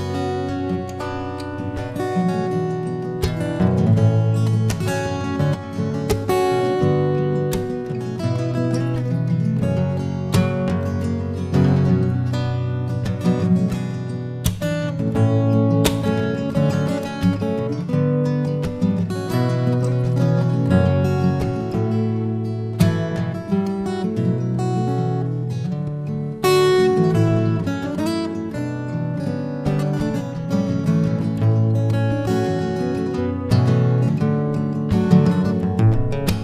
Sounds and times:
Acoustic guitar: 0:00.0 - 0:36.4
Strum: 0:00.0 - 0:36.4.

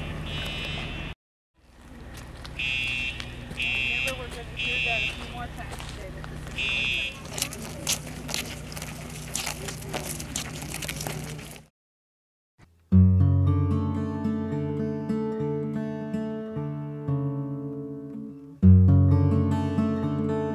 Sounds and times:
Fire alarm: 0:00.3 - 0:01.2, 0:02.6 - 0:05.4, 0:06.6 - 0:07.2
Speech: 0:03.6 - 0:08.1, 0:09.4 - 0:10.4.

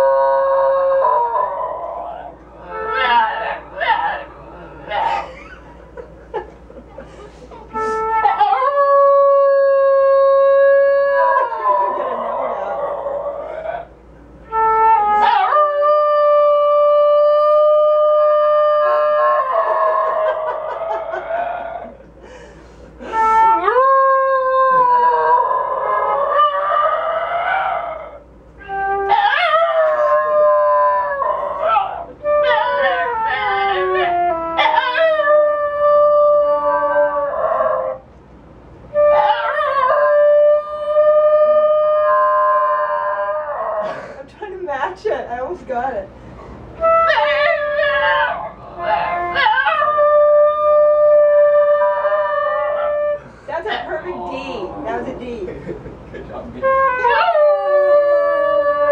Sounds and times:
Wind instrument, woodwind instrument: 0:02.6 - 0:03.5, 0:07.7 - 0:11.8, 0:14.4 - 0:20.1, 0:23.0 - 0:27.7, 0:28.6 - 0:38.1, 0:38.9 - 0:44.0, 0:46.7 - 0:53.4, 0:56.6 - 0:58.9.

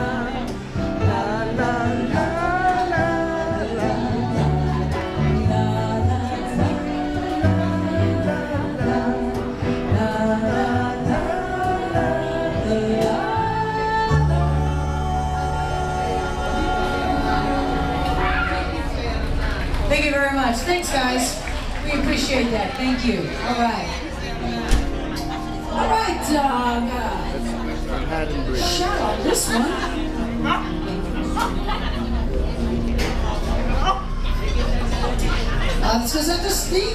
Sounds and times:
Music: 0:00.0 - 0:36.9.

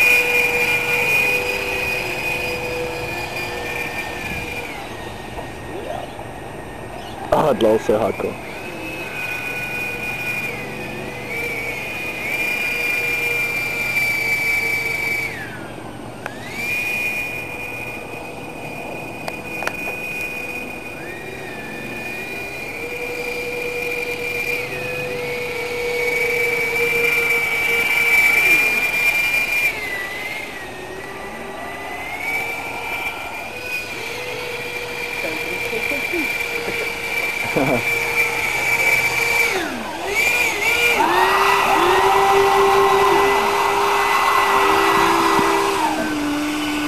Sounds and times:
Motorboat, speedboat: 0:00.0 - 0:46.8.

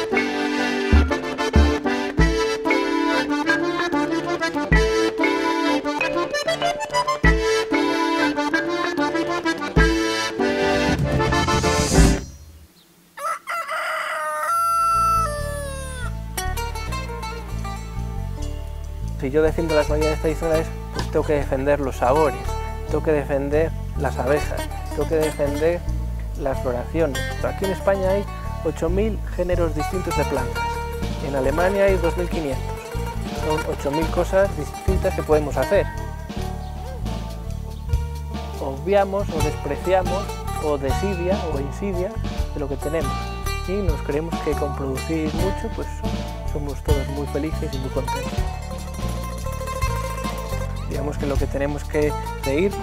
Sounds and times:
Music: 0:00.0 - 0:13.0, 0:14.7 - 0:52.8
Crowing, cock-a-doodle-doo: 0:13.2 - 0:16.1.

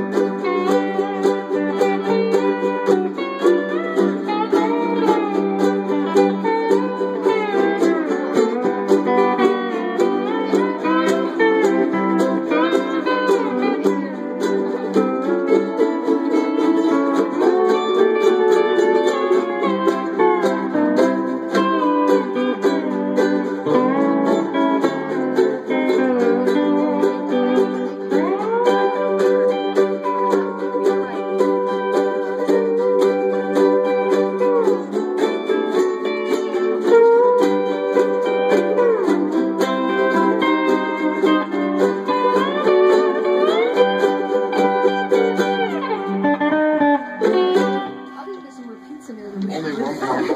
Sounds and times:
Ukulele: 0:00.0 - 0:50.3
Speech: 0:48.1 - 0:50.3.

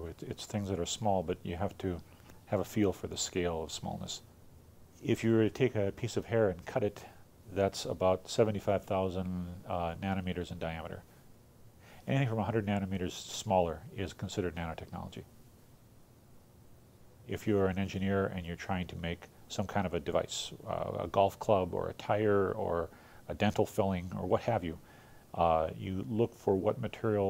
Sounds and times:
Speech: 0:00.0 - 0:04.3, 0:05.0 - 0:11.1, 0:12.1 - 0:15.3, 0:17.3 - 0:24.8, 0:25.4 - 0:27.2.

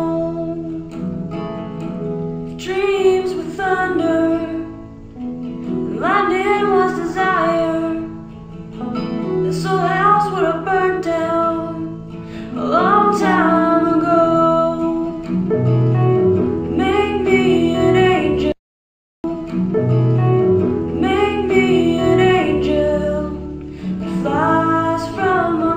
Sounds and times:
Female singing: 0:00.0 - 0:00.9, 0:02.6 - 0:04.8, 0:05.9 - 0:08.1, 0:09.4 - 0:15.3, 0:16.7 - 0:18.6, 0:21.0 - 0:25.7
Music: 0:00.0 - 0:18.6, 0:19.3 - 0:25.7.

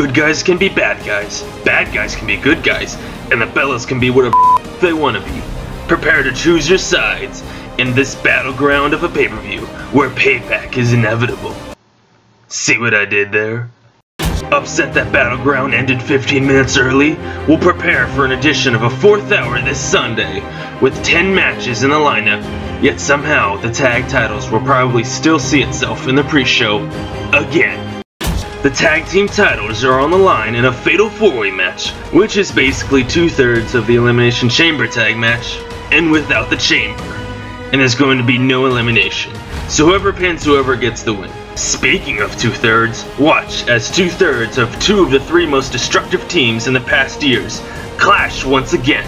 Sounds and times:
Speech: 0:00.0 - 0:11.7, 0:12.5 - 0:13.7, 0:14.5 - 0:27.9, 0:28.6 - 0:49.0
Music: 0:00.0 - 0:11.8, 0:14.2 - 0:49.0.

